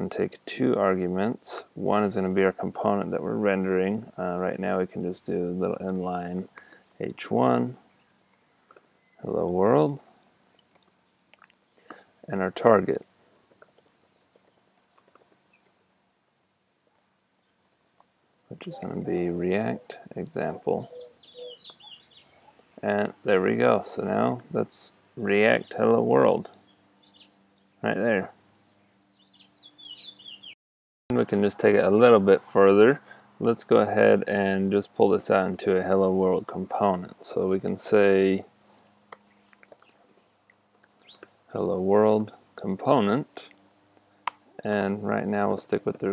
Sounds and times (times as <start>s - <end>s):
Chirp, tweet: 19.7s - 22.6s, 26.6s - 27.8s, 28.7s - 30.6s.